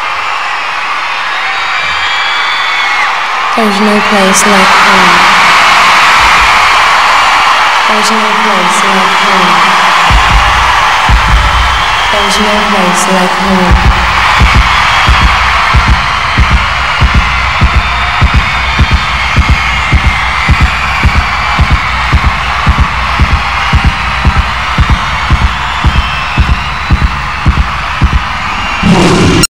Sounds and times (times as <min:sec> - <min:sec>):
Heart sounds, heartbeat: 0:10.1 - 0:11.6, 0:13.8 - 0:28.2.